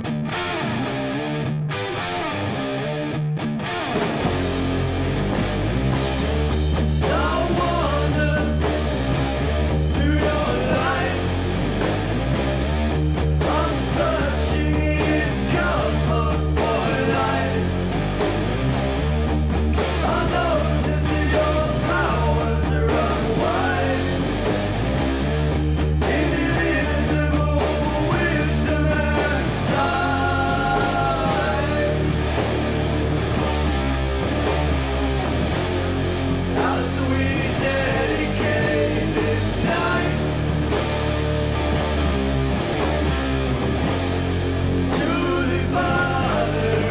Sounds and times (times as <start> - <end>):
Music: 0.0 - 46.9.